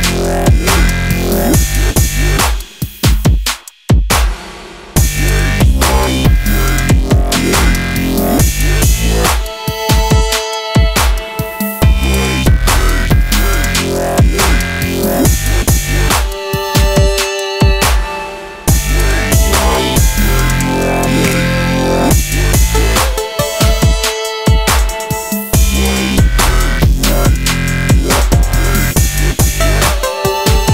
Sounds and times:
Music: 0:00.0 - 0:30.7.

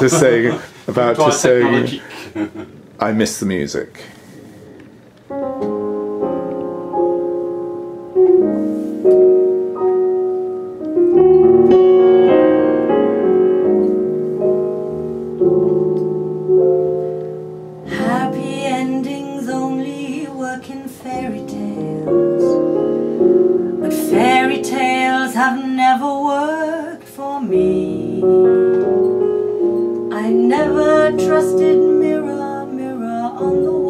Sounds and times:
Music: 0:04.6 - 0:33.8.

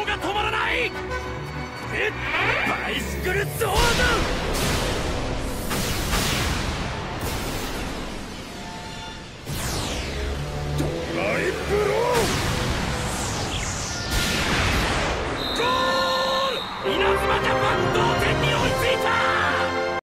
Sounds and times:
Music: 0:00.0 - 0:15.3, 0:16.7 - 0:20.0.

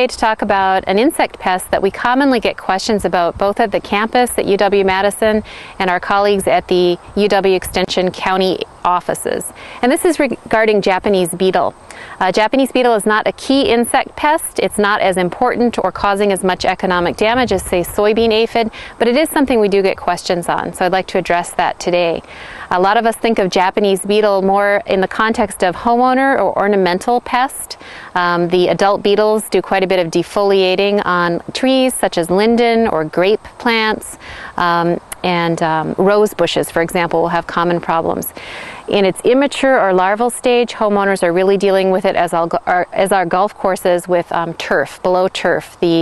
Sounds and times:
Speech: 0:00.0 - 0:46.0.

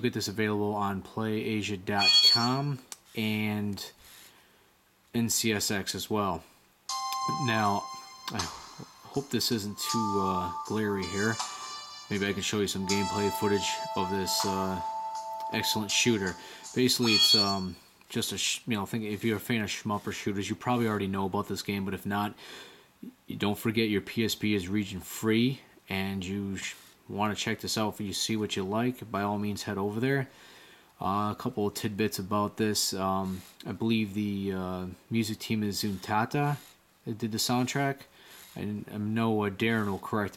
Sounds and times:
Speech: 0:00.0 - 0:04.0, 0:05.1 - 0:06.5, 0:07.3 - 0:11.4, 0:12.1 - 0:14.9, 0:15.5 - 0:22.4, 0:23.0 - 0:30.3, 0:31.0 - 0:40.3
Music: 0:06.9 - 0:17.5.

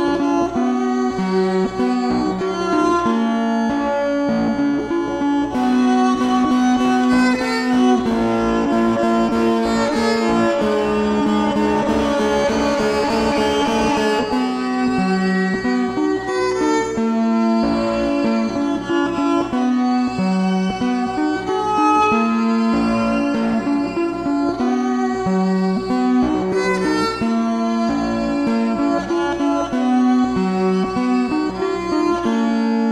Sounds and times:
Violin, fiddle: 0:00.0 - 0:32.9.

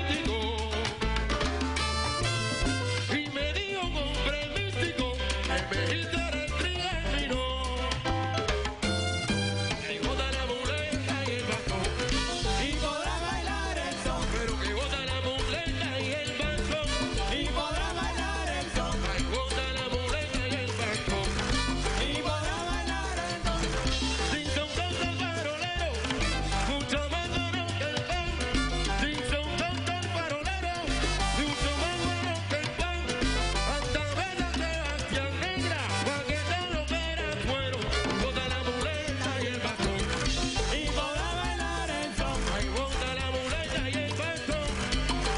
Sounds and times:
Dance music: 0:00.0 - 0:45.3
Salsa music: 0:00.0 - 0:45.3.

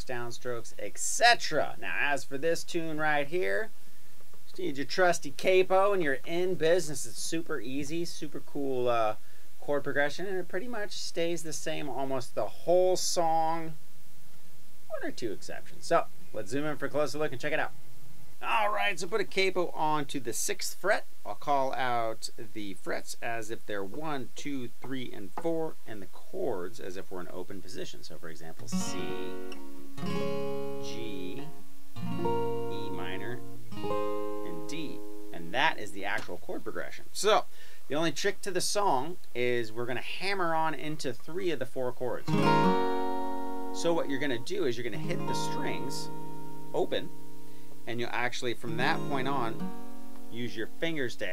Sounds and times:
Speech: 0:00.0 - 0:03.7, 0:04.5 - 0:13.8, 0:14.9 - 0:17.8, 0:18.4 - 0:29.5, 0:30.8 - 0:31.5, 0:32.2 - 0:33.4, 0:34.4 - 0:42.3, 0:43.8 - 0:46.1, 0:46.7 - 0:47.1, 0:47.9 - 0:49.6, 0:50.3 - 0:51.3.

